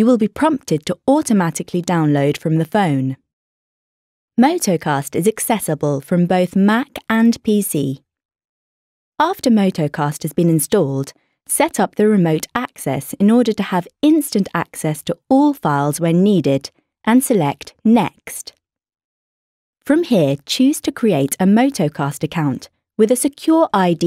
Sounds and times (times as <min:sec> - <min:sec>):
Speech: 0:00.0 - 0:03.2, 0:04.4 - 0:08.0, 0:09.2 - 0:18.5, 0:19.8 - 0:24.0.